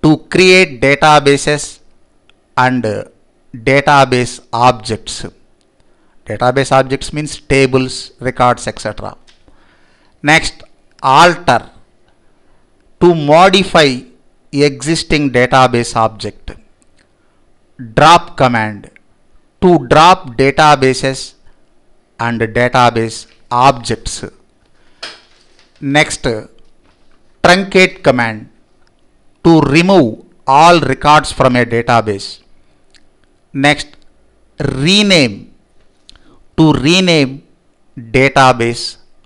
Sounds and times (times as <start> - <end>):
Speech: 0.0 - 1.9, 2.6 - 5.4, 6.2 - 9.3, 10.2 - 11.9, 13.0 - 16.7, 17.8 - 19.0, 19.6 - 21.4, 22.2 - 24.5, 25.8 - 26.6, 27.4 - 28.6, 29.4 - 32.5, 33.5 - 34.0, 34.6 - 35.6, 36.6 - 39.1.